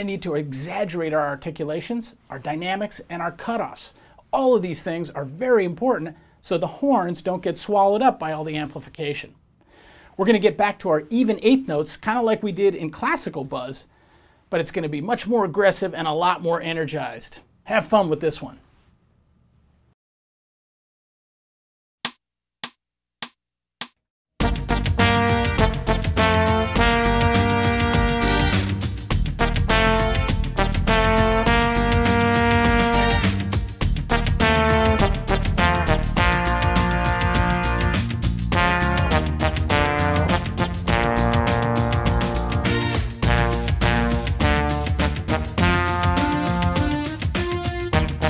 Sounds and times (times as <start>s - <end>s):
Speech: 0.0s - 9.4s, 10.2s - 13.9s, 14.5s - 18.6s.